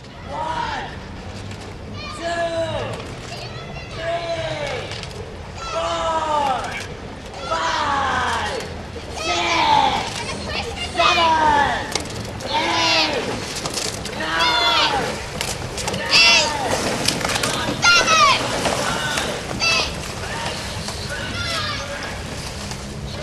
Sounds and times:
Rowboat, canoe, kayak: 0.0s - 23.2s.

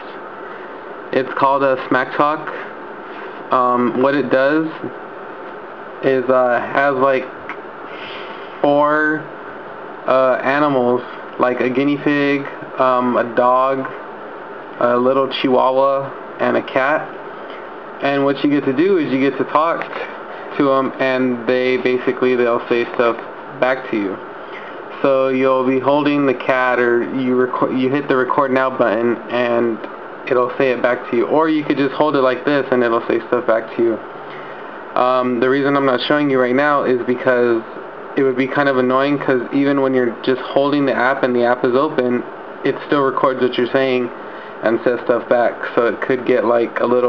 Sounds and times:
Speech: 0.0s - 0.3s, 1.1s - 2.8s, 3.4s - 5.0s, 6.0s - 9.3s, 10.0s - 14.0s, 14.8s - 17.2s, 18.0s - 24.3s, 24.9s - 34.1s, 34.9s - 47.0s.

